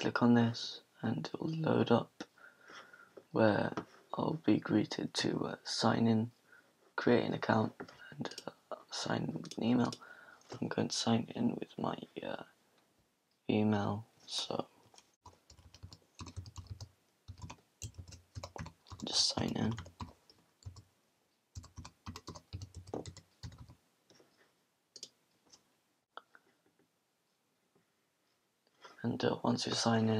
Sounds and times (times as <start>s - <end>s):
Typing: 15.2s - 20.8s, 21.6s - 23.8s.